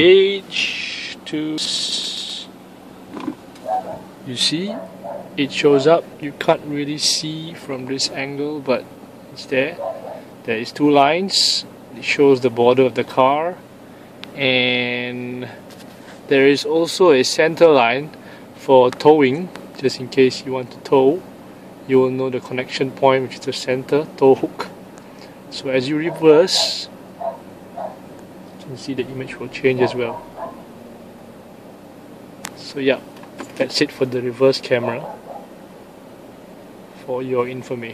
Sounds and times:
Speech: 0:00.0 - 0:02.5, 0:04.2 - 0:09.8, 0:10.4 - 0:13.6, 0:14.4 - 0:15.6, 0:16.3 - 0:21.2, 0:21.9 - 0:24.8, 0:25.5 - 0:26.9, 0:28.6 - 0:30.3, 0:32.5 - 0:35.1, 0:37.0 - 0:37.9.

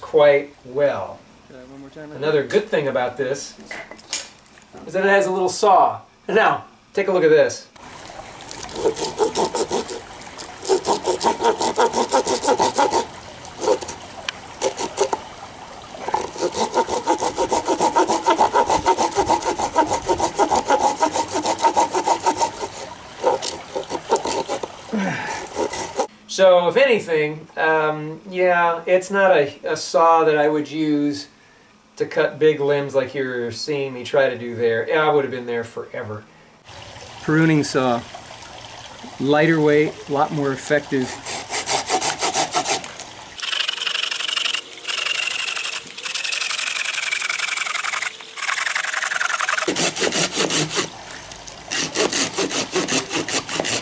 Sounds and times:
Liquid: 0:07.8 - 0:26.1, 0:36.6 - 0:53.8.

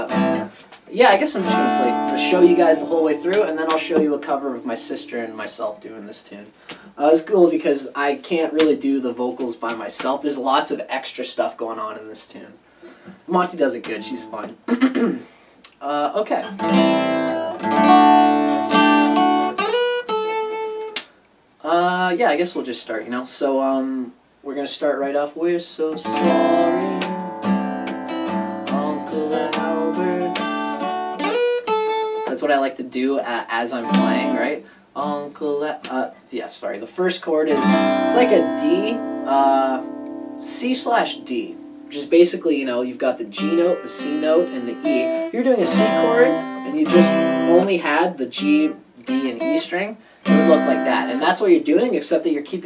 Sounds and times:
Acoustic guitar: 0:00.0 - 0:05.8, 0:12.9 - 0:21.1, 0:25.9 - 0:36.2, 0:37.3 - 0:52.6.

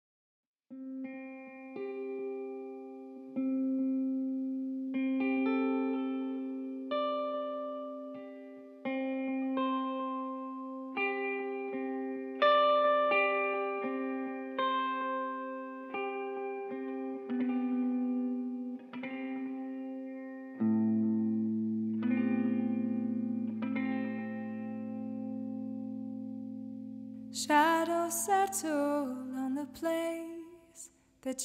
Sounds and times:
Inside, small room: 0:00.7 - 0:31.4
Music: 0:00.7 - 0:31.4.

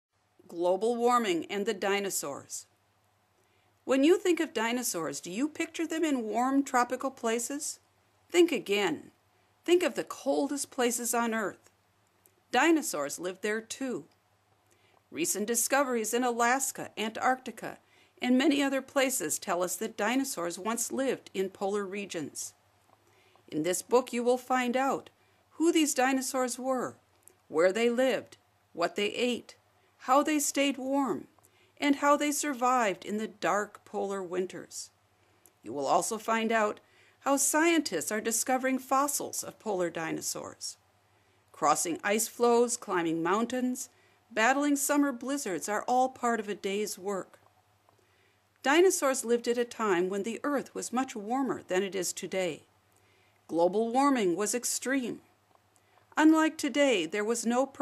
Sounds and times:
Narration, monologue: 0:00.0 - 0:57.8.

